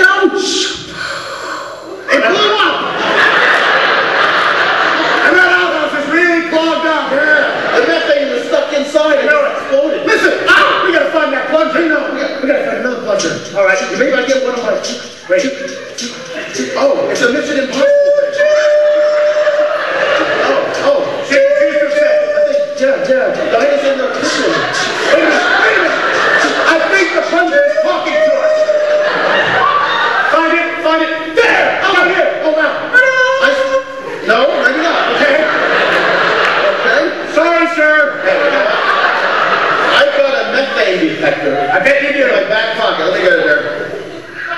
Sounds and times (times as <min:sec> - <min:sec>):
Male speech, man speaking: 0:00.0 - 0:00.8, 0:02.1 - 0:02.9, 0:05.2 - 0:29.3, 0:30.3 - 0:35.7, 0:36.6 - 0:38.9, 0:39.9 - 0:44.0.